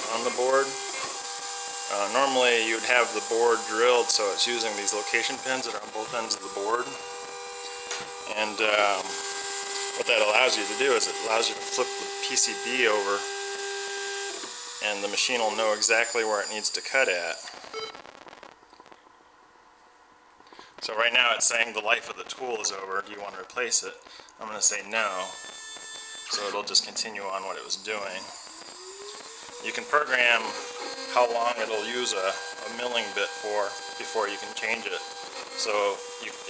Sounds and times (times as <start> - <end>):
Speech: 0.0 - 0.8, 1.9 - 7.0, 8.3 - 9.1, 10.0 - 13.3, 14.8 - 17.4, 20.8 - 25.4, 26.3 - 28.3, 29.6 - 35.0, 35.6 - 36.5.